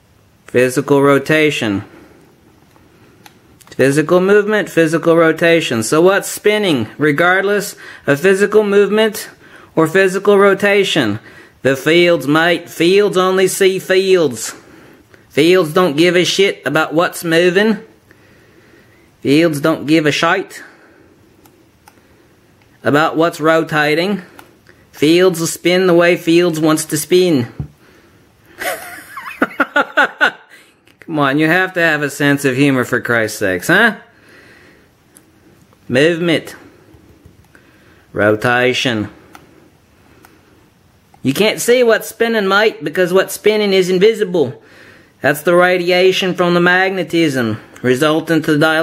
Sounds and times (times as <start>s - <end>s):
Inside, small room: 0.0s - 48.8s
Speech: 0.5s - 1.9s, 3.7s - 14.6s, 15.3s - 17.9s, 19.2s - 20.8s, 22.8s - 24.3s, 24.9s - 27.7s, 31.0s - 34.1s, 35.9s - 36.7s, 38.1s - 39.2s, 41.2s - 44.6s, 45.2s - 48.8s.